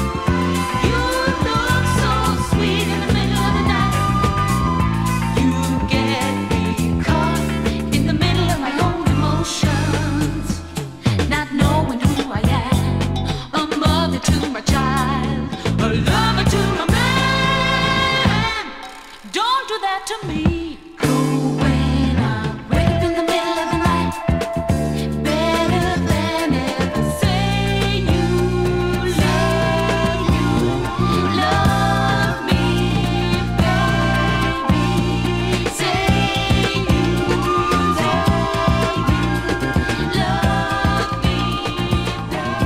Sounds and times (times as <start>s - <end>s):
Singing: 0.0s - 12.9s, 13.5s - 42.6s
Music of Asia: 0.0s - 19.5s, 21.0s - 42.6s.